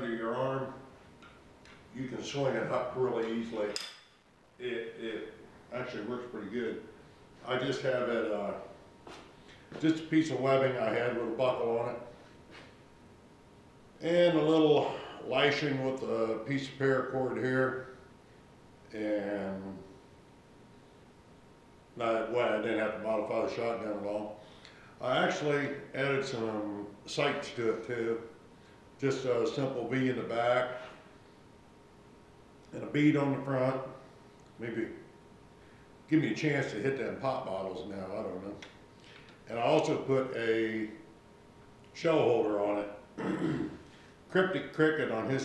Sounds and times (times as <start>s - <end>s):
Speech: 0.0s - 0.8s, 1.9s - 3.8s, 4.6s - 8.8s, 9.8s - 12.1s, 14.0s - 17.9s, 18.9s - 19.9s, 22.0s - 24.4s, 25.0s - 28.3s, 29.0s - 30.9s, 32.7s - 34.0s, 34.6s - 35.1s, 36.1s - 38.7s, 39.5s - 41.0s, 41.9s - 43.0s, 44.3s - 45.4s.